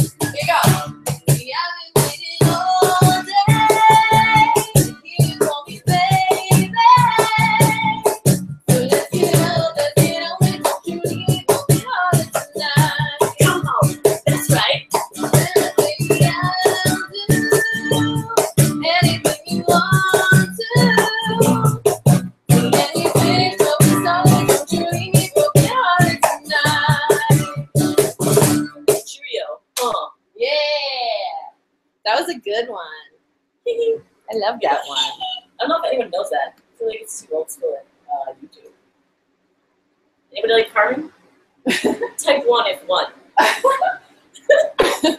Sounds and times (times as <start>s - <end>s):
Music: 0.0s - 29.1s
Female singing: 0.3s - 21.8s, 22.5s - 27.6s.